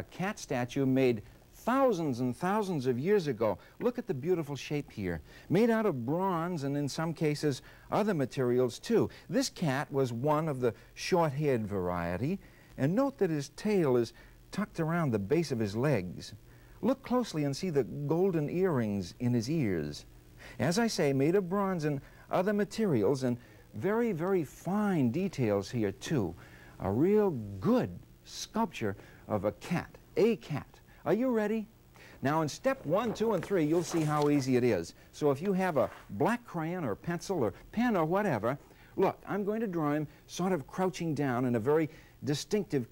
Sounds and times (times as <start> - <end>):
Speech: 0.0 - 42.9.